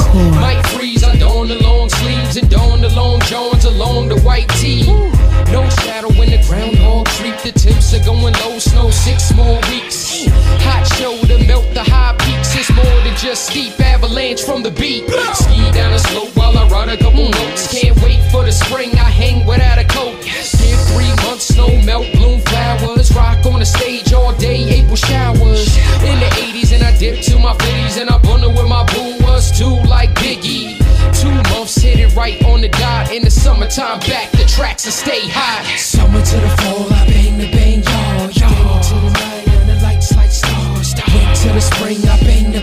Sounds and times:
Rapping: 0.0s - 42.6s.

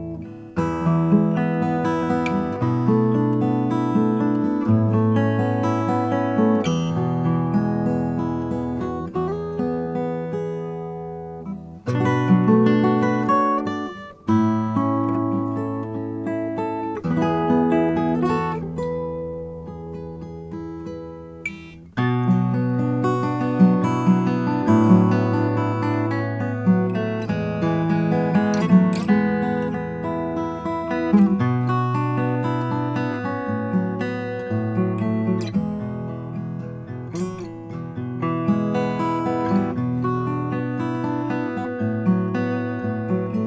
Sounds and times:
Acoustic guitar: 0.0s - 43.4s.

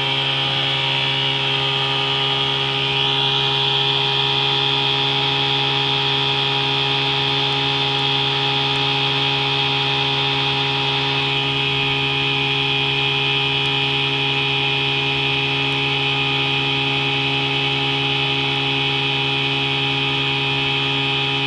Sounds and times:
Motorboat, speedboat: 0.0s - 21.4s.

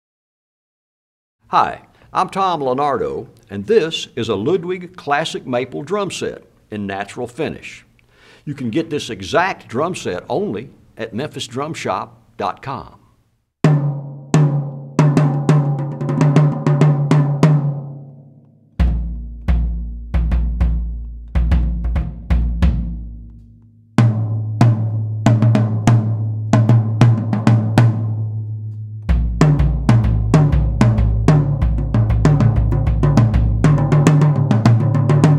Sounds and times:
Bass drum: 13.6s - 17.9s, 18.8s - 35.3s
Snare drum: 13.7s - 17.8s, 18.8s - 23.4s, 24.0s - 28.2s, 29.1s - 35.3s.

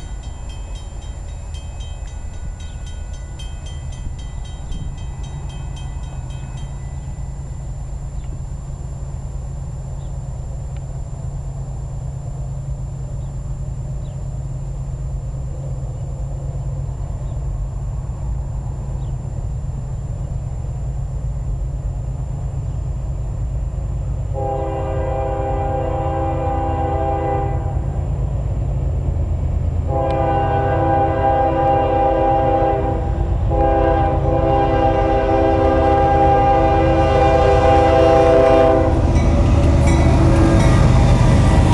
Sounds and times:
Outside, urban or manmade: 0.0s - 41.7s
Railroad car, train wagon: 0.0s - 41.7s
Train horn: 24.3s - 28.0s, 29.9s - 41.0s.

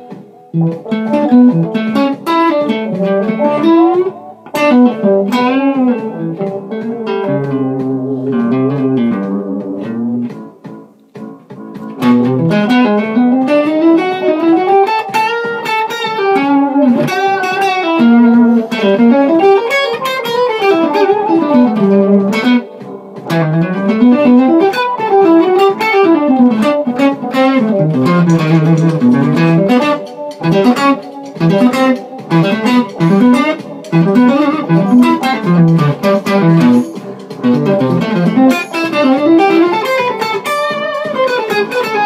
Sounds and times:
Acoustic guitar: 0.0s - 42.0s
Strum: 0.0s - 42.0s.

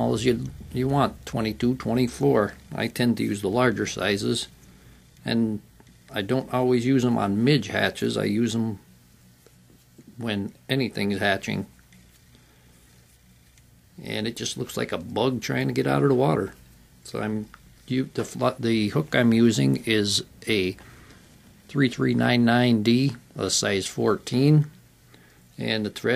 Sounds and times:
Speech: 0.0s - 4.6s, 5.2s - 8.9s, 10.0s - 11.8s, 14.0s - 20.8s, 21.7s - 24.8s, 25.6s - 26.1s.

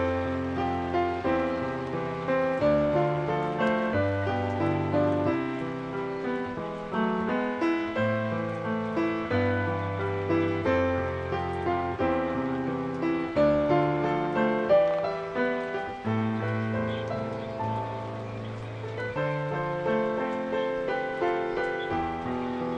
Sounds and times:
Music: 0.0s - 22.7s
Stream: 0.0s - 22.7s.

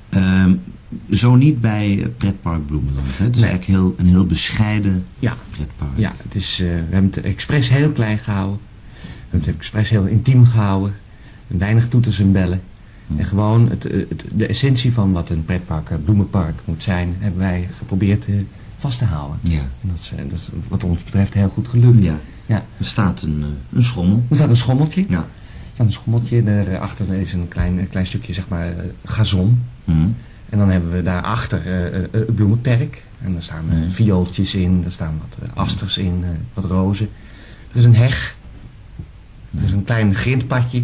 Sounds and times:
Speech: 0.1s - 8.7s, 9.3s - 38.4s, 39.5s - 40.8s.

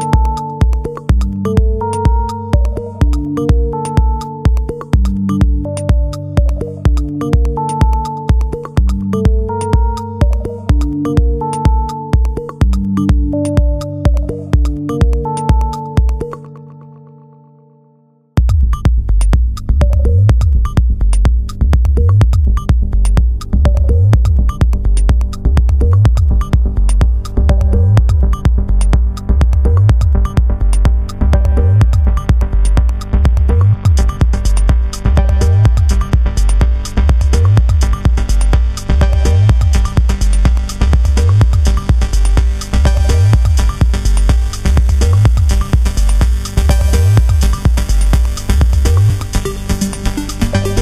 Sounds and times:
Music: 0.0s - 50.8s.

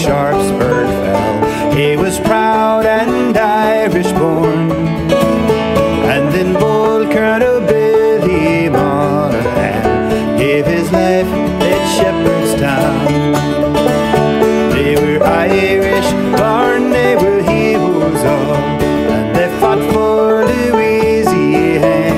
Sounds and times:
Banjo: 0.0s - 22.1s
Country: 0.0s - 22.1s.

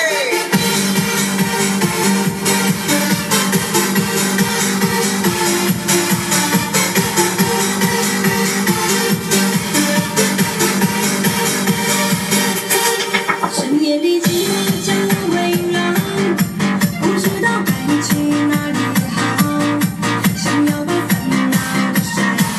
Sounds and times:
Exciting music: 0.0s - 22.5s.

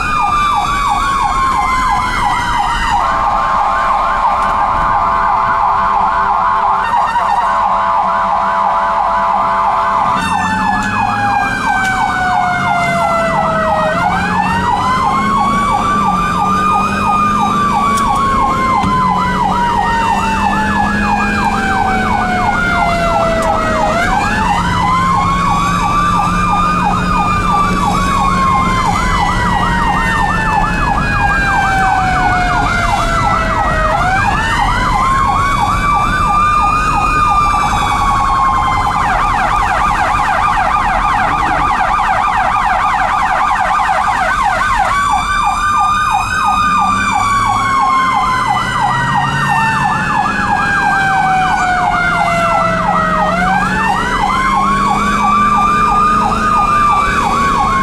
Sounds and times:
Ambulance (siren): 0.0s - 57.8s
Police car (siren): 0.0s - 57.8s.

